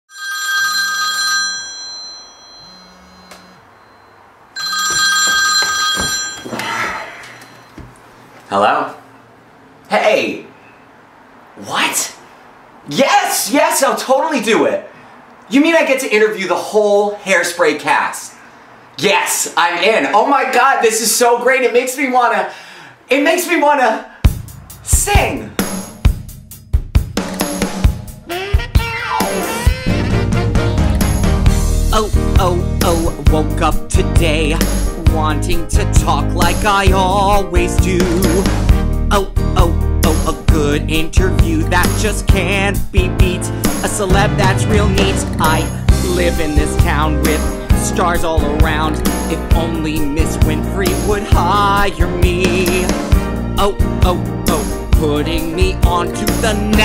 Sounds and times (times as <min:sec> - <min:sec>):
Speech: 0:08.5 - 0:09.0, 0:09.9 - 0:10.5, 0:11.6 - 0:12.2, 0:12.9 - 0:14.9, 0:15.5 - 0:18.4, 0:19.0 - 0:22.5, 0:23.1 - 0:24.1, 0:24.9 - 0:25.6, 0:31.9 - 0:38.1.